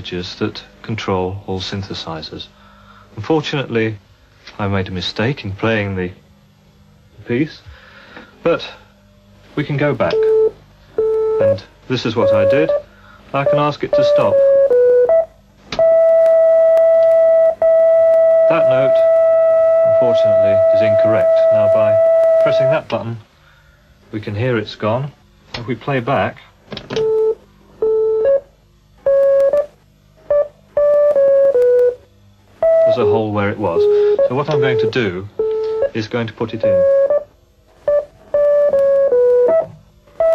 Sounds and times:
Speech: 0.0s - 2.5s, 3.2s - 6.2s, 7.2s - 7.7s, 8.4s - 8.8s, 9.5s - 10.4s, 11.5s - 12.8s, 13.4s - 14.4s, 18.5s - 19.1s, 19.8s - 23.3s, 24.1s - 26.6s, 32.9s - 36.9s.

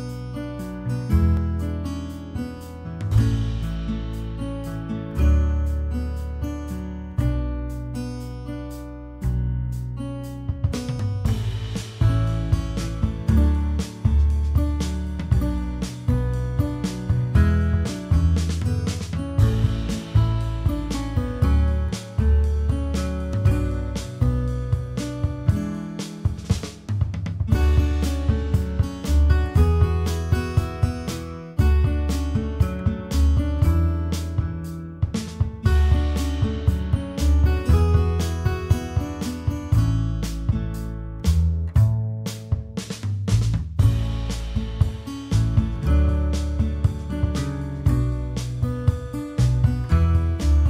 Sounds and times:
Music: 0.0s - 50.7s.

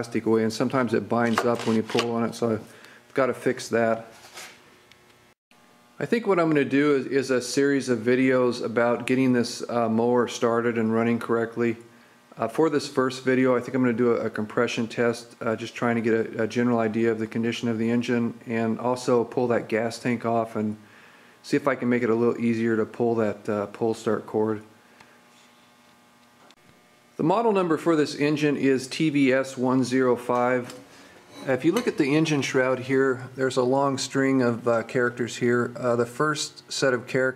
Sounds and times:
Speech: 0.0s - 4.1s, 6.0s - 20.8s, 21.4s - 24.7s, 27.2s - 30.8s, 31.4s - 37.3s.

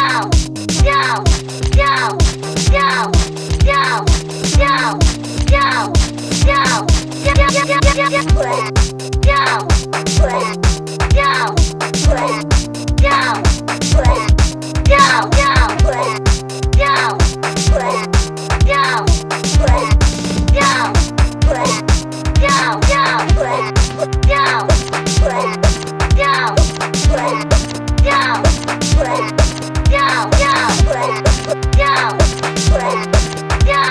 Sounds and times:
Speech: 0.0s - 12.4s, 13.0s - 14.3s, 14.9s - 16.2s, 16.8s - 21.8s, 22.4s - 33.9s
Techno: 0.0s - 33.9s.

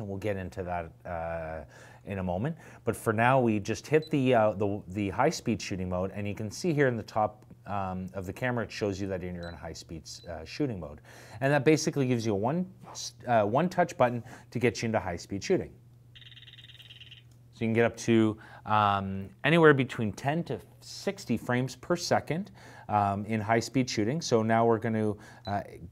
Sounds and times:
Speech: 0.0s - 15.8s, 17.6s - 25.9s.

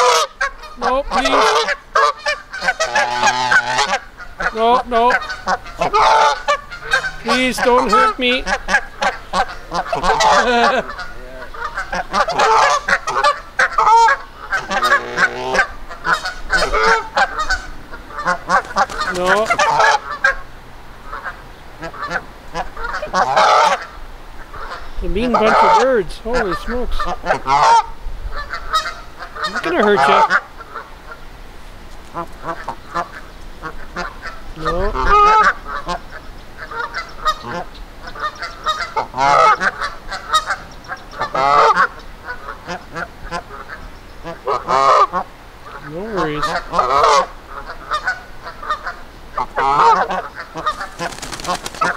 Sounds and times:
Honk: 0.0s - 20.5s, 21.1s - 31.2s, 32.1s - 51.9s.

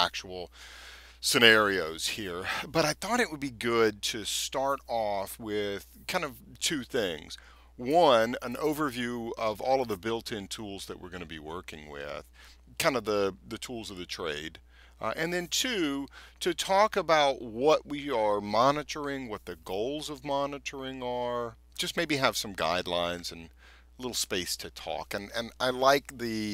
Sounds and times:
Speech: 0.0s - 0.5s, 1.2s - 26.5s.

